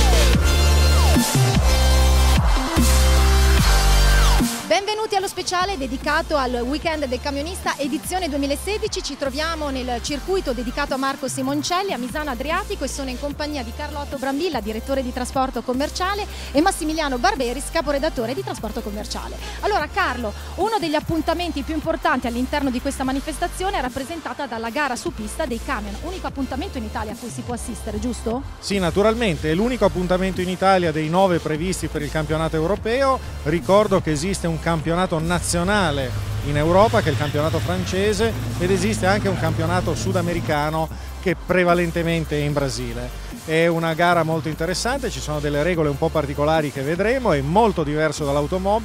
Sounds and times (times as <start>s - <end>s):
Music: 0.0s - 48.8s
Speech: 4.7s - 48.8s.